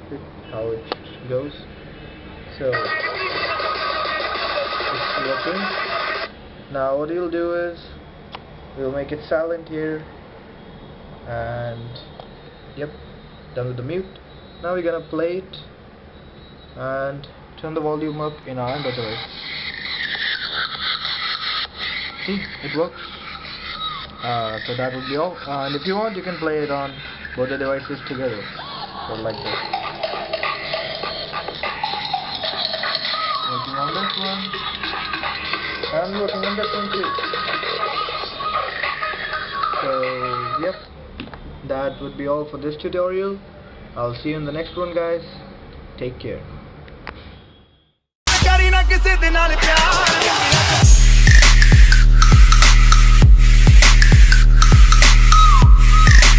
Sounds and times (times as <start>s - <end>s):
Speech: 16.8s - 19.2s, 24.2s - 28.4s, 35.8s - 37.2s, 41.6s - 45.4s, 46.0s - 46.6s.